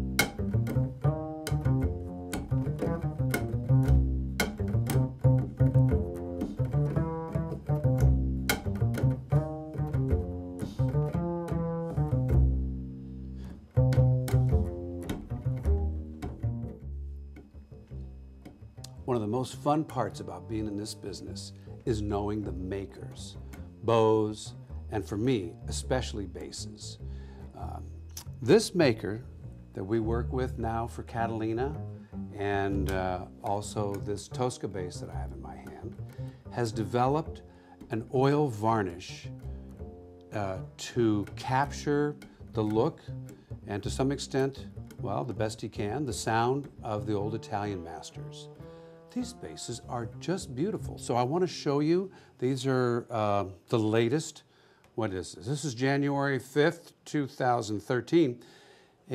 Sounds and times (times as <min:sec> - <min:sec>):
Speech: 0:18.9 - 0:27.0, 0:27.6 - 0:31.8, 0:32.4 - 0:36.0, 0:36.6 - 0:39.3, 0:40.4 - 0:43.0, 0:43.7 - 0:58.4.